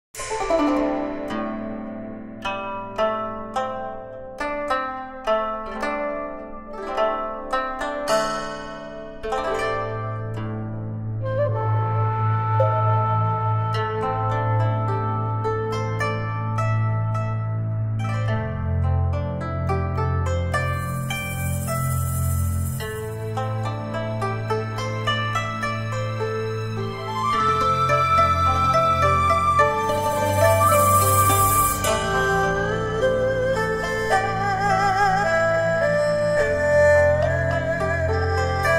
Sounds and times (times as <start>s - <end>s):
Music: 0.0s - 38.7s.